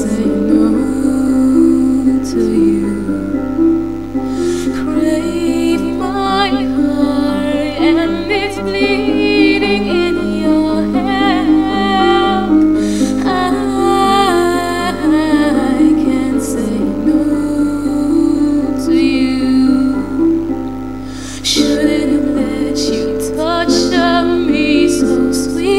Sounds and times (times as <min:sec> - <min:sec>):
Female singing: 0:00.0 - 0:03.4, 0:04.4 - 0:20.6, 0:21.4 - 0:25.7
Music: 0:00.0 - 0:25.7.